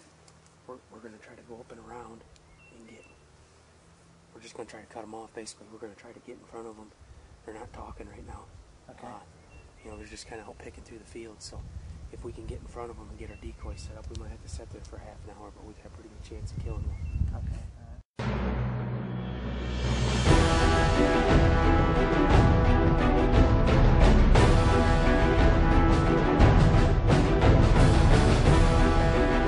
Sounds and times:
Speech: 0:00.7 - 0:03.2, 0:04.4 - 0:18.0
Bird: 0:02.4 - 0:03.3, 0:09.0 - 0:10.9, 0:13.2 - 0:14.0, 0:16.8 - 0:17.5
Music: 0:18.2 - 0:29.4.

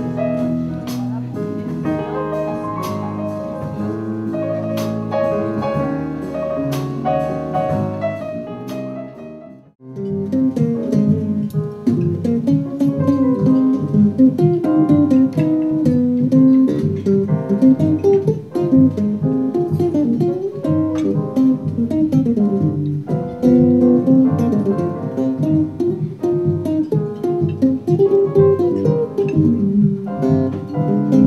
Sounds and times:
Jazz: 0:00.0 - 0:31.2.

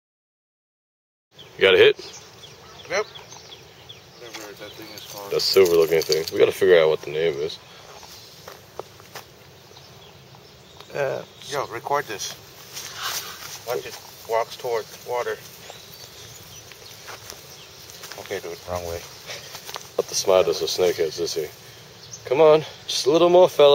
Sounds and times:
Outside, rural or natural: 0:01.3 - 0:23.7
Speech: 0:04.2 - 0:07.6, 0:18.2 - 0:19.1, 0:20.0 - 0:21.6, 0:22.3 - 0:23.7.

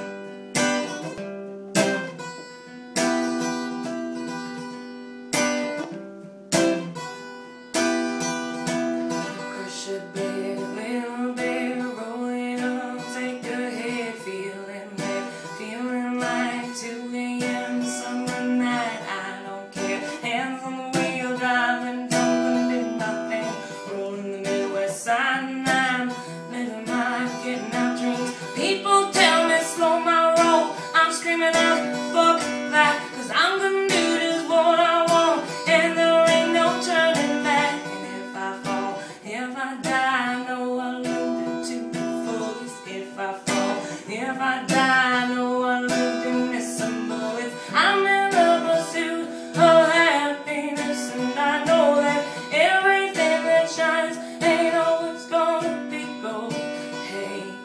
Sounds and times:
Music: 0:00.0 - 0:57.6
Female singing: 0:09.2 - 0:57.6.

